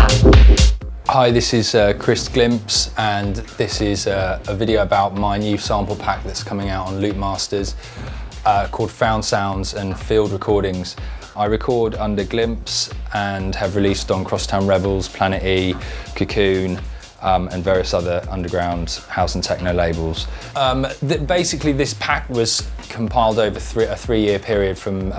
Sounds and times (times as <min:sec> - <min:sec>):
Music: 0:00.0 - 0:25.1
Speech: 0:01.1 - 0:07.8, 0:08.4 - 0:25.1.